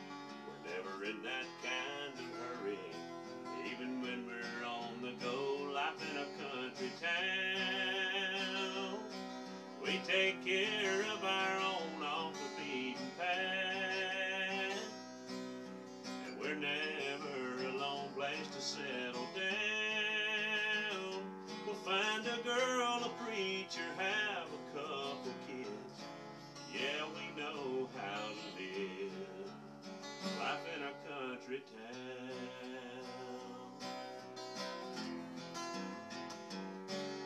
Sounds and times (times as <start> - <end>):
Music: 0.0 - 37.2
Male singing: 0.5 - 3.0, 3.6 - 9.0, 9.8 - 15.0, 16.3 - 26.0, 26.7 - 29.5, 30.4 - 33.8.